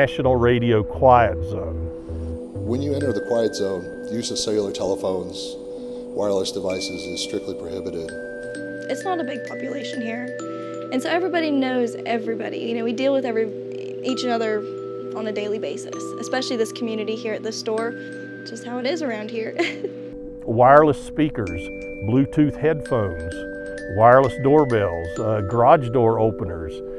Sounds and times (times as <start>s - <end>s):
Speech: 0.0s - 1.9s, 2.6s - 5.6s, 6.2s - 8.1s, 8.9s - 14.6s, 15.2s - 17.9s, 20.4s - 26.8s
Music: 0.0s - 26.9s.